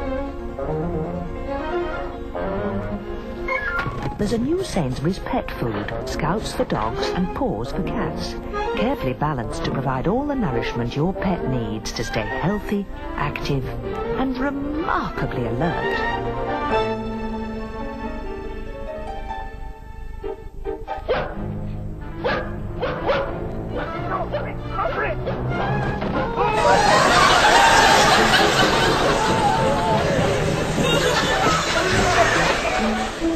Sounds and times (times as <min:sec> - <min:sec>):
Music: 0:00.0 - 0:33.3
Bow-wow: 0:21.0 - 0:21.4, 0:22.2 - 0:23.4.